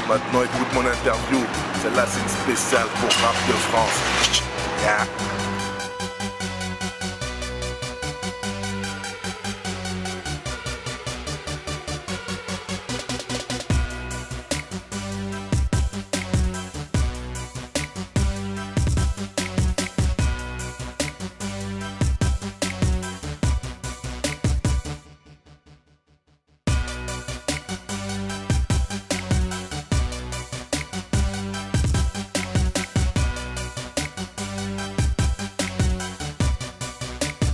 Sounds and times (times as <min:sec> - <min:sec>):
Music: 0:00.0 - 0:37.5.